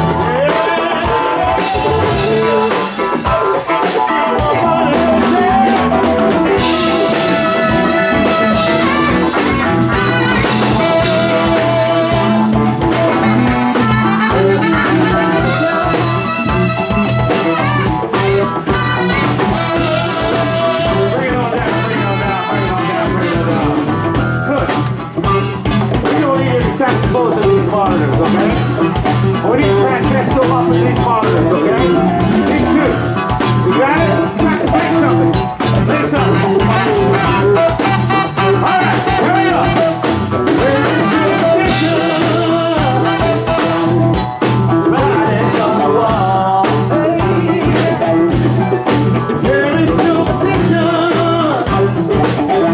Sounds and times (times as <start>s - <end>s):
Music: 0.0s - 52.7s.